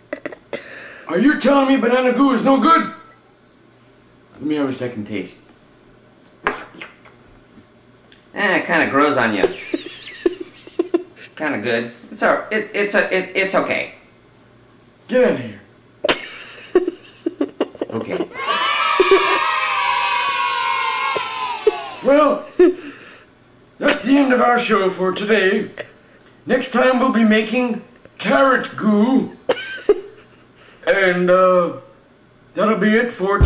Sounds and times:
Speech: 0:01.1 - 0:03.0, 0:04.4 - 0:05.4, 0:08.4 - 0:09.6, 0:11.4 - 0:14.0, 0:15.1 - 0:15.7, 0:23.8 - 0:25.8, 0:26.5 - 0:29.4, 0:30.9 - 0:31.8, 0:32.6 - 0:33.4.

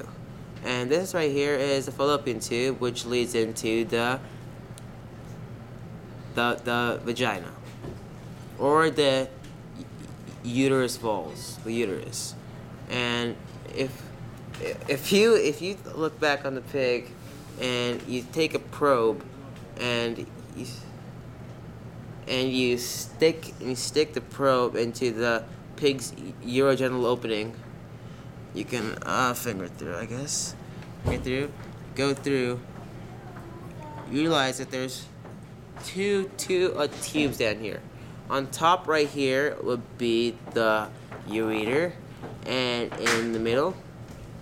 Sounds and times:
Speech: 0:00.0 - 0:04.2, 0:06.4 - 0:07.7, 0:08.6 - 0:20.9, 0:22.2 - 0:27.6, 0:28.6 - 0:35.2, 0:35.8 - 0:43.8.

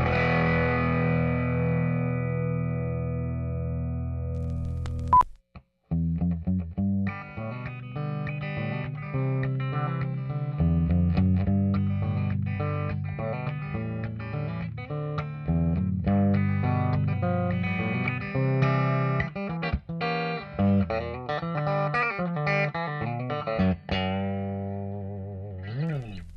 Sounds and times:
Music: 0:00.0 - 0:04.7, 0:05.9 - 0:26.3.

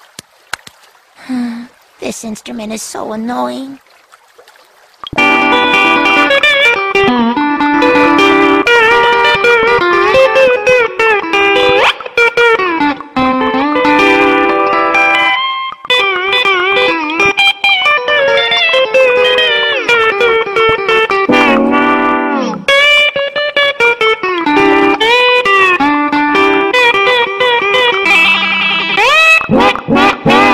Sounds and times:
Electric guitar: 0:05.1 - 0:30.5
Strum: 0:05.2 - 0:30.5.

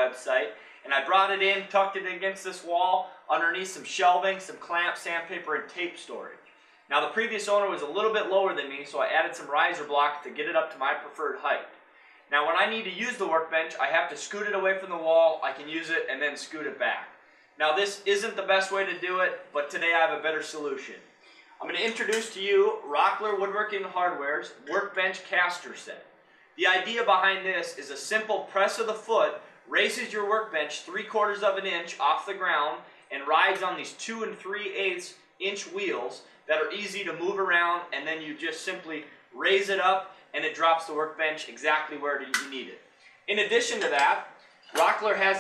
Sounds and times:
Speech: 0:00.0 - 0:21.0, 0:21.6 - 0:45.4.

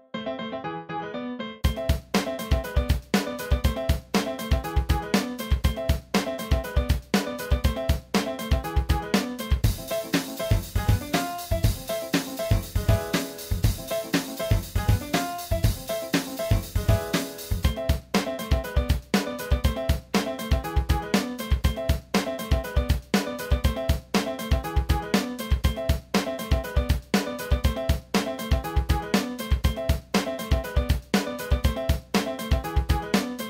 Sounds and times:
Music: 0:00.0 - 0:33.5.

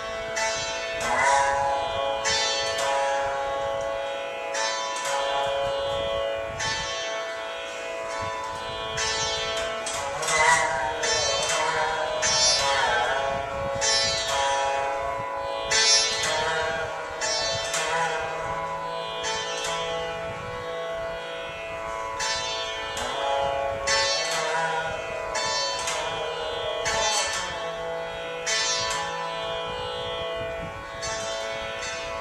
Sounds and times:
Carnatic music: 0:00.0 - 0:32.2
Sitar: 0:00.0 - 0:32.2.

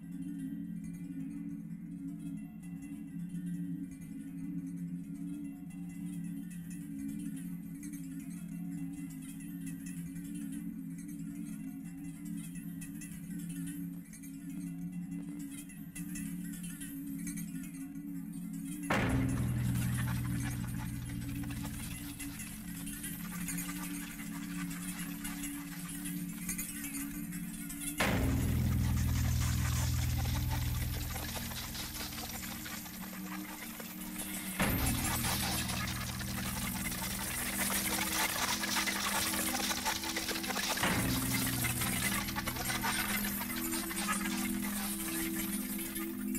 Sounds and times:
Maraca: 0:18.9 - 0:26.7, 0:28.0 - 0:46.3.

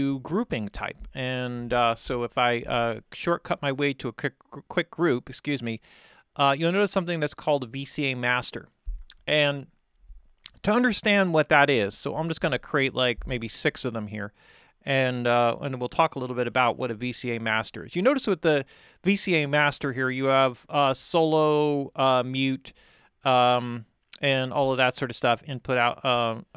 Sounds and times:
Speech: 0:00.0 - 0:05.8, 0:06.4 - 0:09.7, 0:10.5 - 0:26.5.

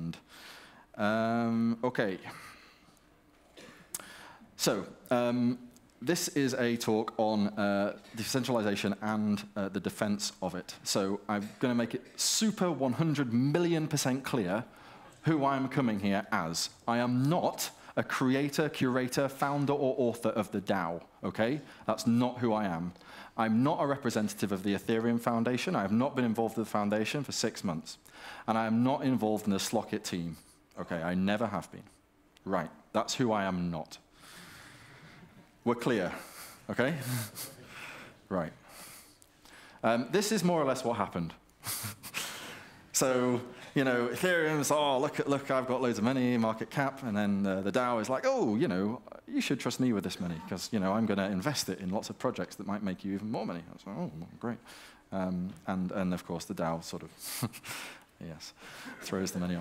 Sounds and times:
Speech: 0:00.0 - 0:00.2, 0:01.0 - 0:02.4, 0:04.6 - 0:34.1, 0:35.6 - 0:37.6, 0:38.3 - 0:38.6, 0:39.8 - 0:41.4, 0:43.0 - 0:57.2, 0:58.2 - 0:59.6.

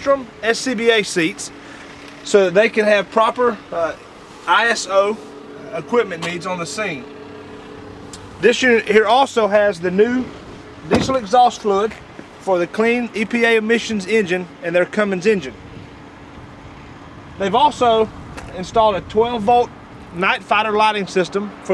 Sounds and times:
Speech: 0:00.0 - 0:01.6, 0:02.2 - 0:07.0, 0:08.4 - 0:10.3, 0:10.9 - 0:15.6, 0:17.4 - 0:21.7
Truck: 0:00.0 - 0:21.7.

